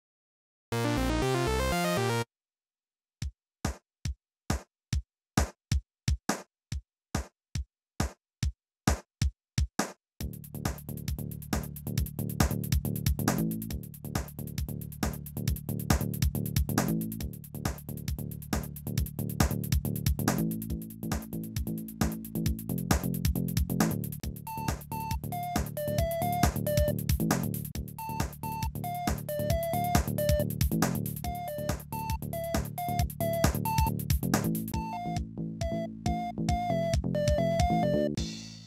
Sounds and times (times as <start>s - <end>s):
Music: 0.8s - 2.3s, 5.4s - 6.5s, 7.2s - 38.6s.